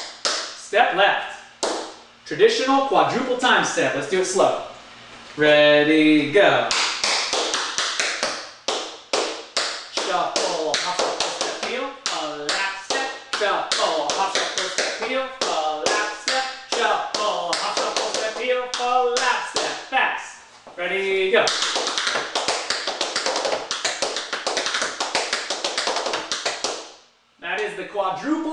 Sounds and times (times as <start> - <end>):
Speech: 0.6 - 1.5, 2.3 - 4.7, 5.4 - 6.7, 10.0 - 21.5, 27.4 - 28.5.